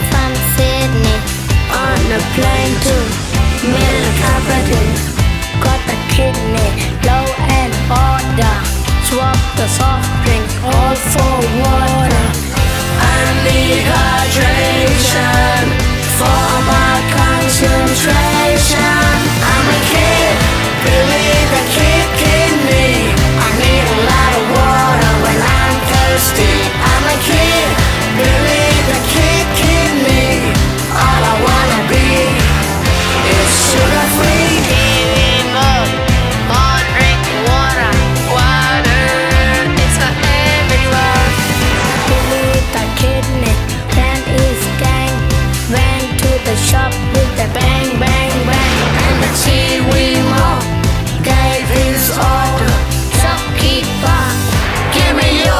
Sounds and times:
Music: 0.0 - 55.5.

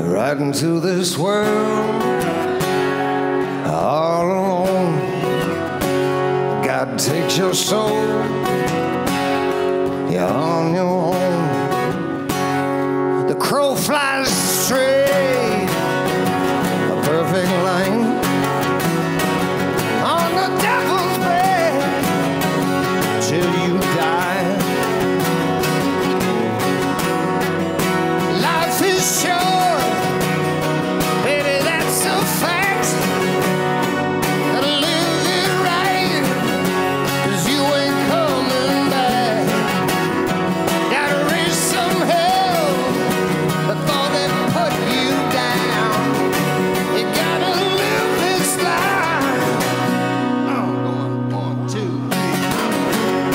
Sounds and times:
Music: 0.0 - 53.3.

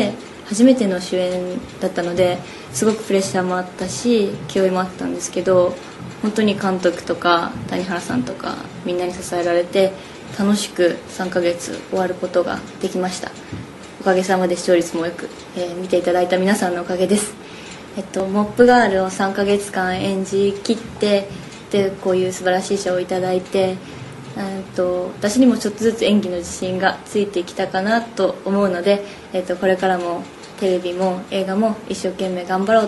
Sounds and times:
Female speech, woman speaking: 0.0 - 32.8
Narration, monologue: 0.0 - 32.8.

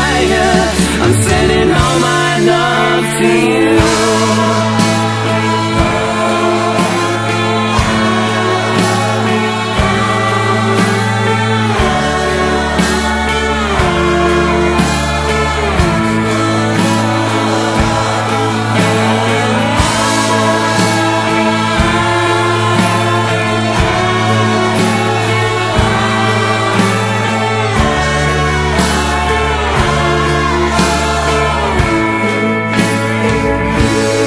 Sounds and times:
Music: 0.0 - 34.2.

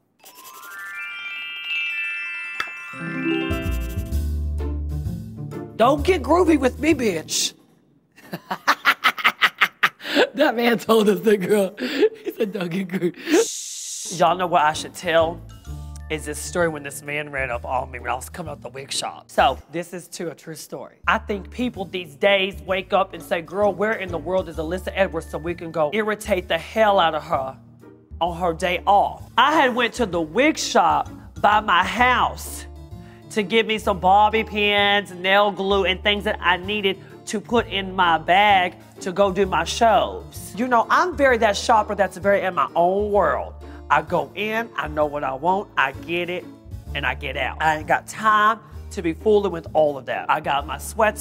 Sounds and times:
Music: 0.0 - 7.7, 10.7 - 51.2
Speech: 5.8 - 7.6, 12.4 - 15.4, 16.0 - 27.6, 28.2 - 32.7, 33.3 - 51.2.

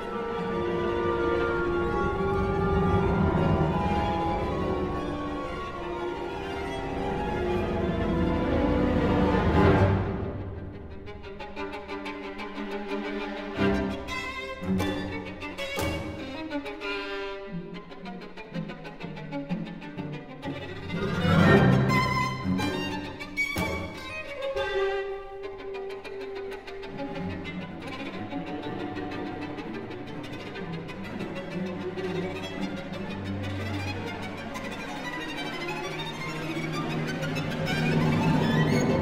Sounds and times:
Violin, fiddle: 0.0 - 39.0.

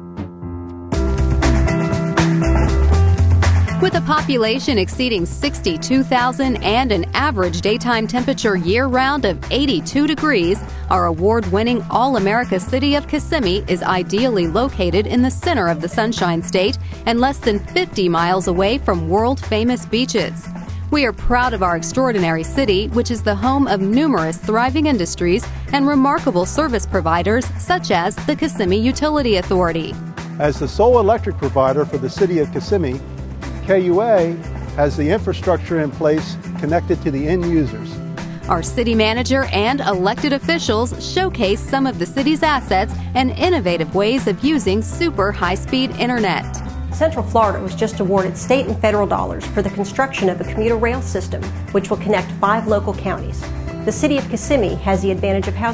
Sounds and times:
Music: 0.0 - 55.7
Speech: 3.8 - 20.4, 21.0 - 33.0, 33.7 - 37.9, 38.5 - 46.4, 47.0 - 55.7.

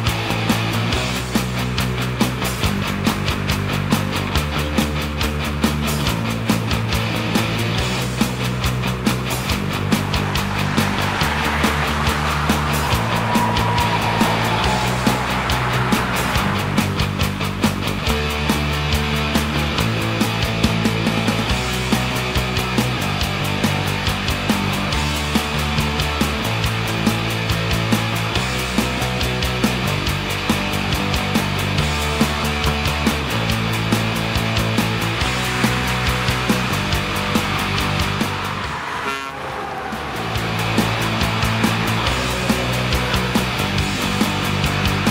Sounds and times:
Car: 0.0 - 45.1
Music: 0.0 - 45.1
Truck: 0.0 - 45.1.

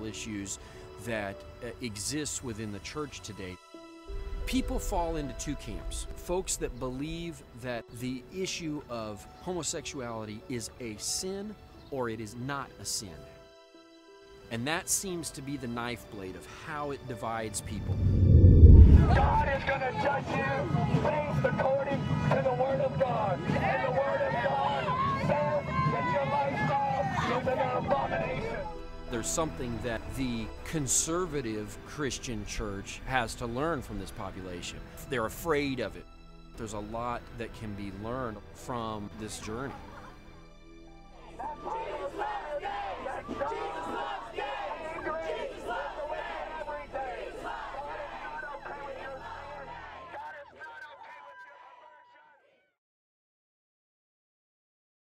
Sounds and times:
Speech: 0.0 - 3.6, 4.5 - 13.2, 14.5 - 17.9, 19.1 - 36.0, 36.6 - 40.2
Music: 0.0 - 51.1.

